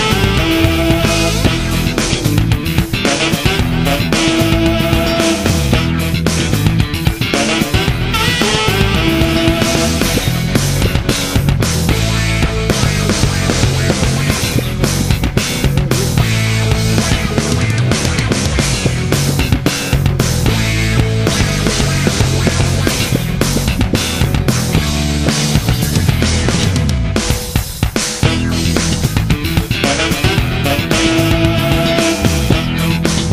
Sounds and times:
Video game music: 0.0 - 33.3.

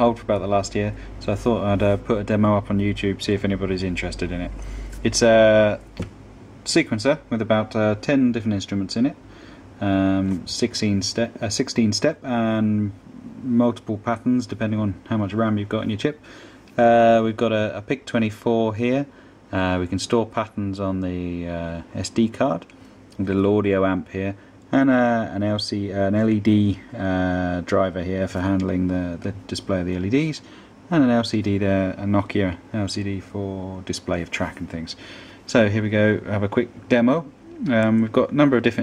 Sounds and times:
Speech: 0.0 - 5.9, 6.6 - 9.2, 9.8 - 16.2, 16.8 - 38.8.

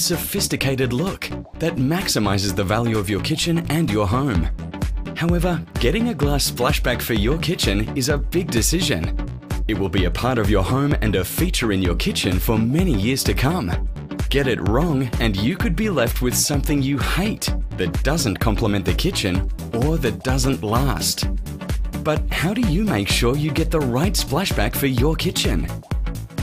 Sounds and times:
Speech: 0.0 - 4.5, 5.2 - 9.1, 9.7 - 21.3, 22.0 - 25.8
Music: 0.0 - 26.4.

